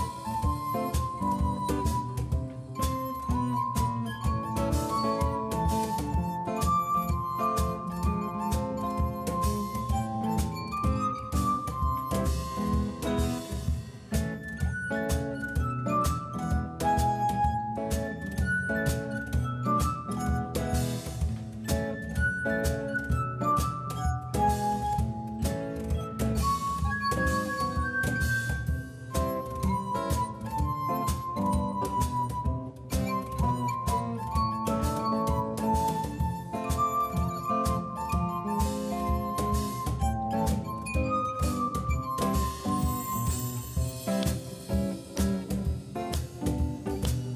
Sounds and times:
Guitar: 0.0 - 47.3.

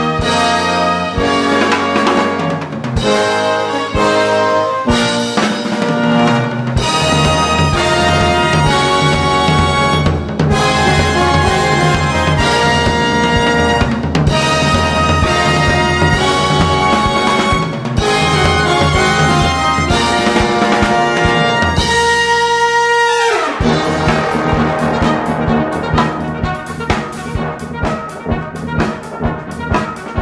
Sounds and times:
Drum: 0.0 - 22.7, 23.5 - 30.2.

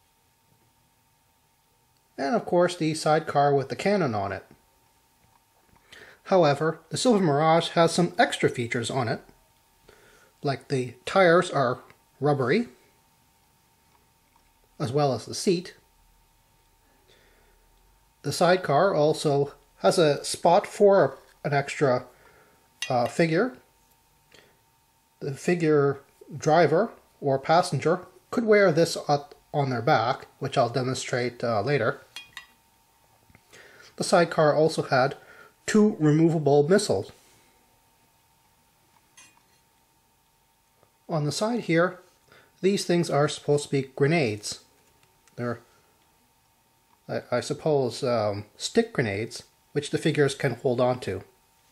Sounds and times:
Speech: 2.2 - 4.6, 6.2 - 9.4, 10.4 - 12.8, 14.8 - 15.9, 18.2 - 22.1, 22.8 - 23.7, 25.2 - 32.0, 34.0 - 37.2, 41.1 - 44.7, 45.4 - 45.7, 47.1 - 51.4.

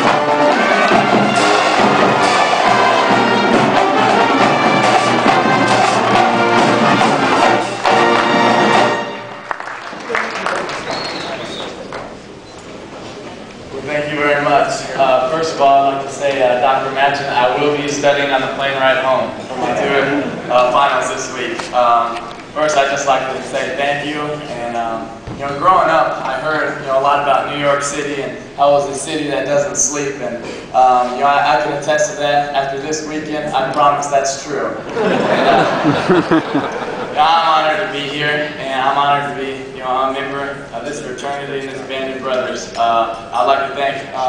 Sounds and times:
Music: 0.0 - 9.8
Narration, monologue: 13.6 - 35.6, 37.0 - 44.2
Male speech, man speaking: 13.7 - 34.8, 37.2 - 44.2.

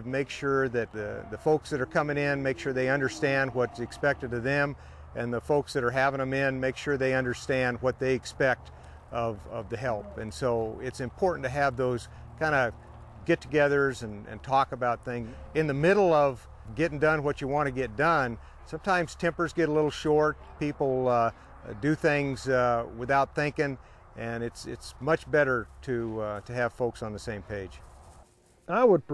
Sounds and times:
Speech: 0.0 - 27.8, 28.7 - 29.1.

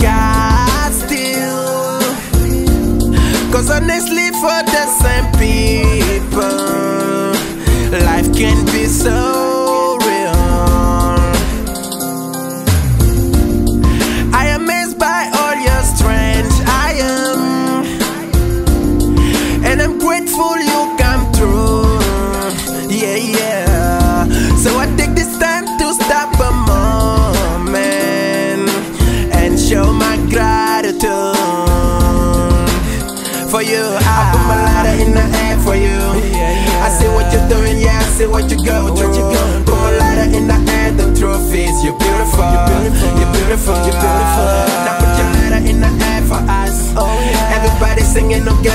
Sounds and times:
Music: 0.0 - 48.7.

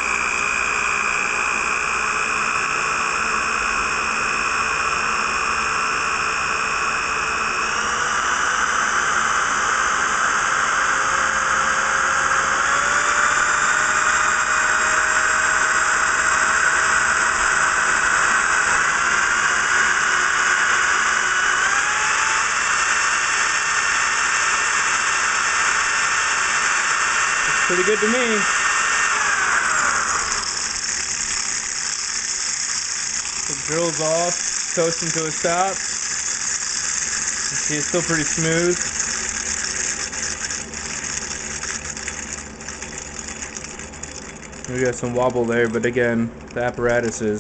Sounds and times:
Rattle: 25.3 - 47.4
Speech: 27.5 - 28.5, 33.5 - 35.8, 37.5 - 38.9, 44.7 - 47.4.

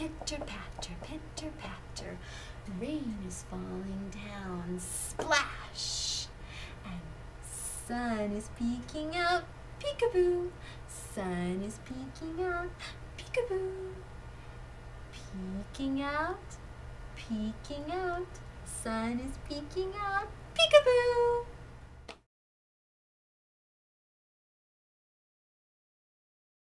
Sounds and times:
Speech: 0.0 - 6.3, 18.7 - 21.5.

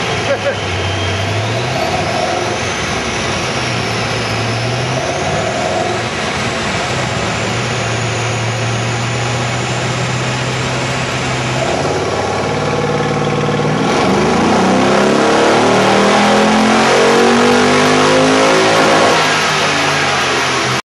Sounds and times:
Car: 0.0 - 20.8.

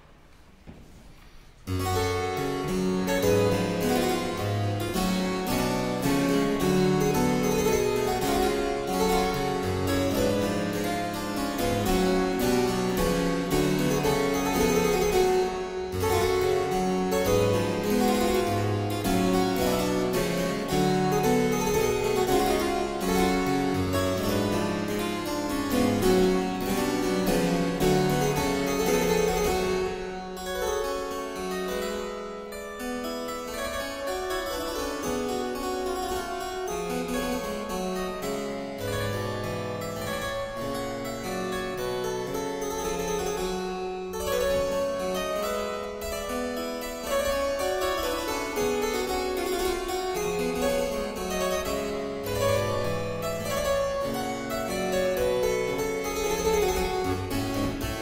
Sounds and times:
Harpsichord: 1.6 - 58.0.

